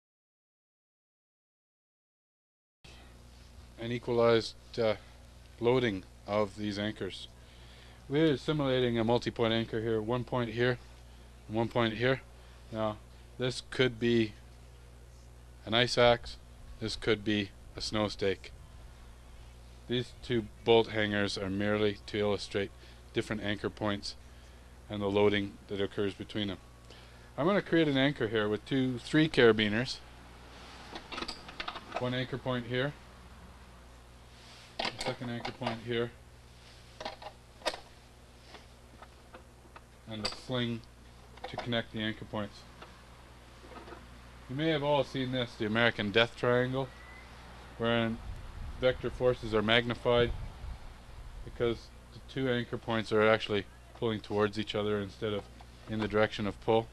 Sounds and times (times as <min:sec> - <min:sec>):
Speech: 0:03.8 - 0:07.3, 0:08.1 - 0:10.8, 0:11.5 - 0:14.4, 0:15.6 - 0:18.6, 0:19.9 - 0:24.2, 0:24.9 - 0:26.6, 0:27.4 - 0:30.0, 0:32.0 - 0:33.0, 0:34.9 - 0:36.2, 0:40.1 - 0:42.7, 0:44.5 - 0:46.9, 0:47.8 - 0:48.2, 0:48.8 - 0:50.4, 0:51.5 - 0:56.9.